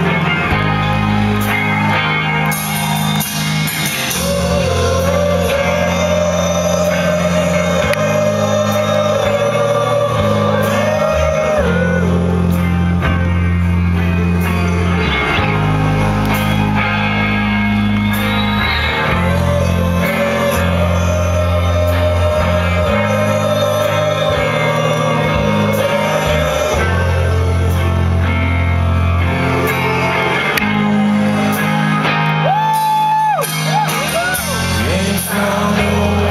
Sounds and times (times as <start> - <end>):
Music: 0.0 - 36.3.